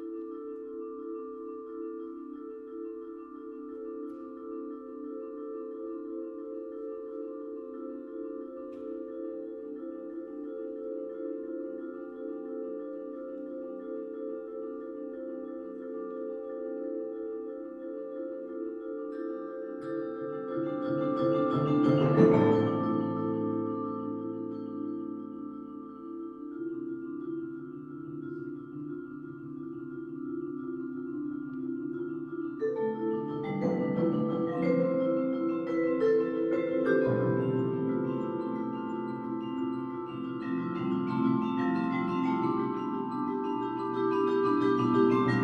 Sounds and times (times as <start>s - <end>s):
Classical music: 0.0s - 45.4s
Marimba, xylophone: 0.0s - 45.4s
Vibraphone: 0.0s - 45.4s.